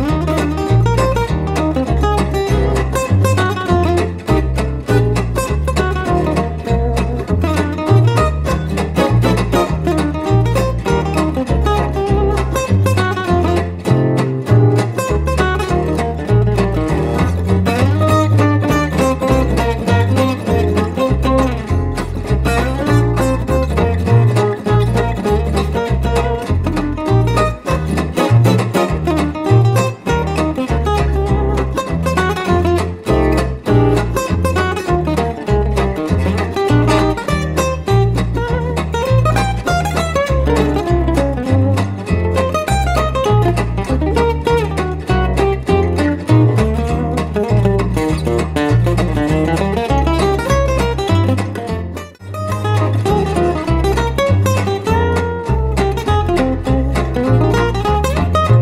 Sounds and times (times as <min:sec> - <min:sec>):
Acoustic guitar: 0:00.0 - 0:58.6
Electric guitar: 0:00.0 - 0:58.6.